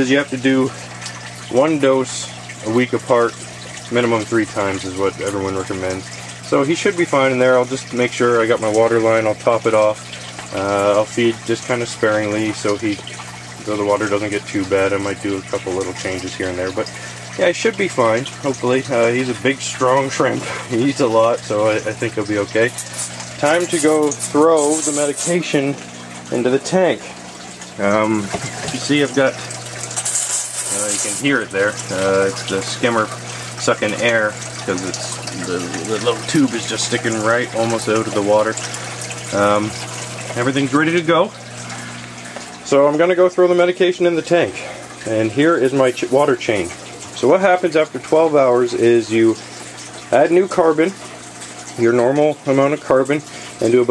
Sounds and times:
Bathtub (filling or washing): 0.0s - 53.9s
Pump (liquid): 0.0s - 53.9s
Water: 0.0s - 53.9s
Water tap, faucet: 0.0s - 53.9s.

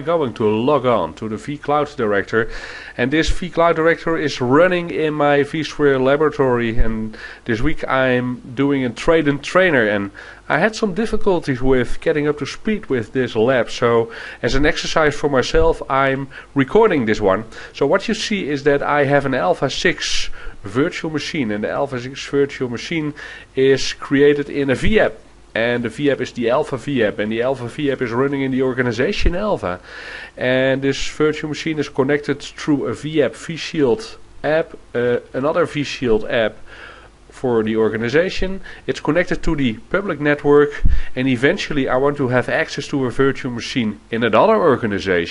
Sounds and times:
Speech: 0.0s - 29.8s, 30.4s - 36.6s, 37.3s - 45.3s.

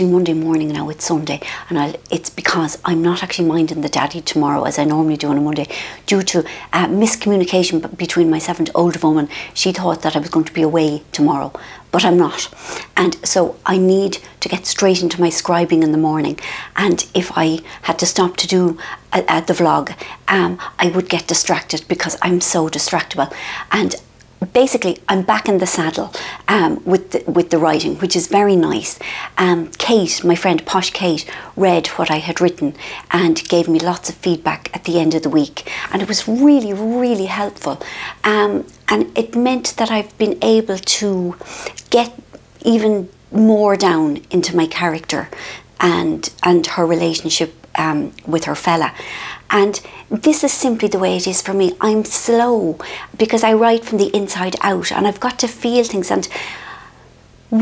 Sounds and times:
Speech: 0.0s - 56.3s.

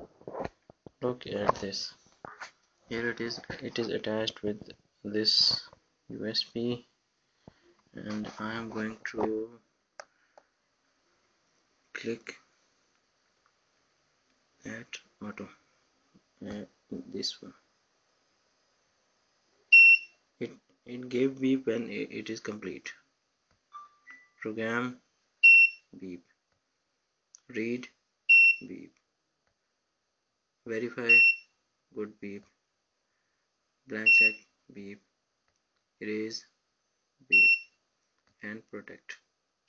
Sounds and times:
Speech: 1.0s - 2.0s, 2.9s - 6.9s, 7.9s - 9.6s, 12.0s - 12.5s, 14.6s - 15.6s, 16.4s - 17.6s, 20.4s - 23.0s, 24.4s - 25.0s, 26.0s - 26.3s, 27.4s - 28.0s, 28.6s - 29.0s, 30.7s - 31.2s, 31.9s - 32.6s, 33.9s - 35.1s, 36.0s - 36.5s, 38.4s - 39.2s.

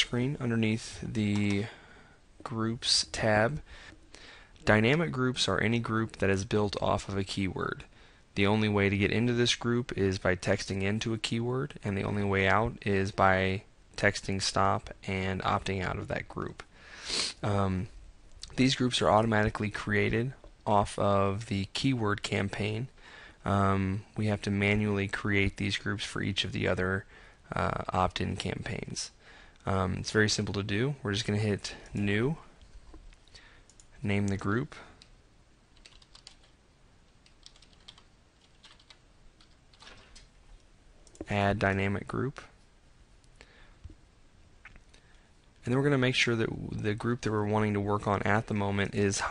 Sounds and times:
Speech: 0.0s - 1.8s, 2.4s - 3.6s, 4.6s - 16.7s, 17.4s - 32.5s, 34.0s - 35.0s, 41.2s - 42.6s, 45.6s - 49.3s.

